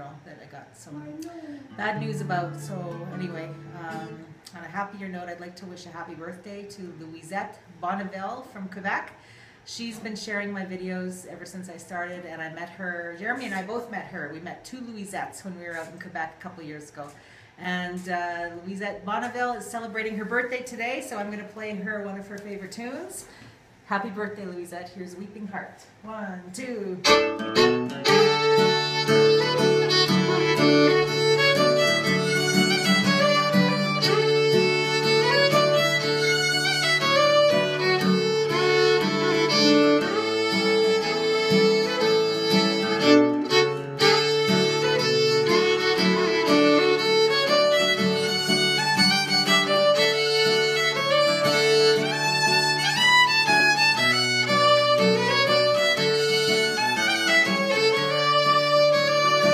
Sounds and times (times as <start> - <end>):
Speech: 0.0 - 23.3, 23.9 - 27.0.